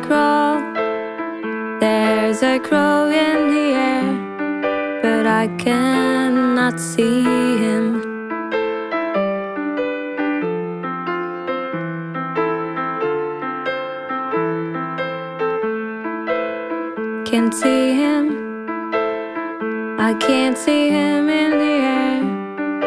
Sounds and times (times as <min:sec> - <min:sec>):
Music: 0:00.0 - 0:22.8.